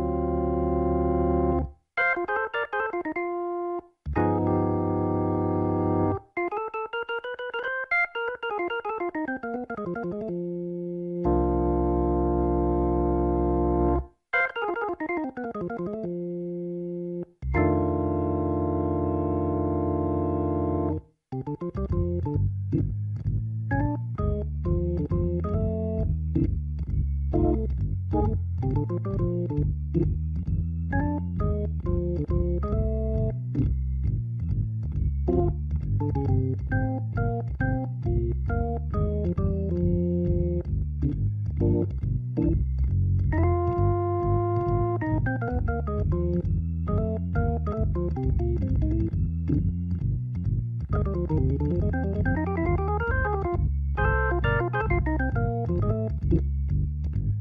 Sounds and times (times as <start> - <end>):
Hammond organ: 0.0 - 57.4.